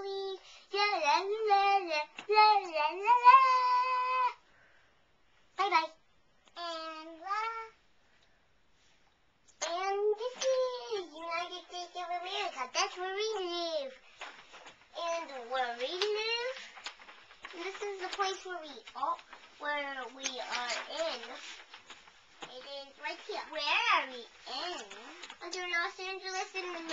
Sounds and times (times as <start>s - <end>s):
Speech: 0.0s - 4.4s, 5.6s - 7.8s, 9.5s - 14.0s, 15.0s - 16.7s, 17.5s - 21.6s, 22.4s - 26.9s.